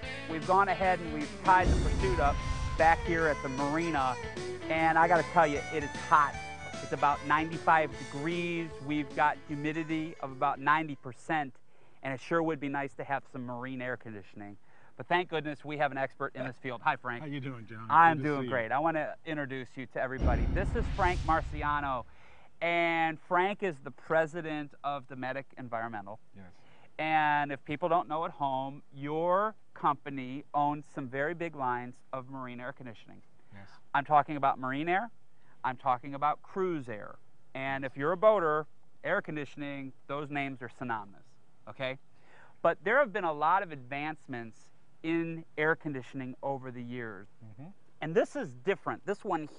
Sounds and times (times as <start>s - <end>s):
Speech: 0.3s - 22.0s, 22.6s - 42.0s, 42.6s - 49.5s.